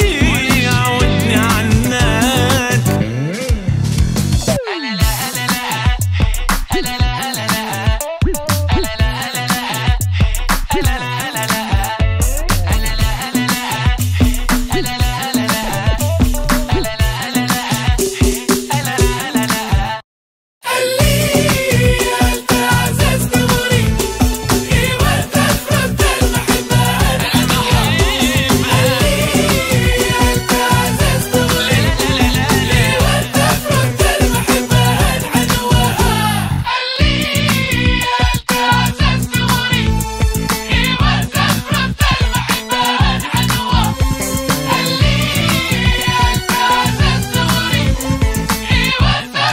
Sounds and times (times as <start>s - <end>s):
Music: 0.0s - 20.0s, 20.7s - 49.5s.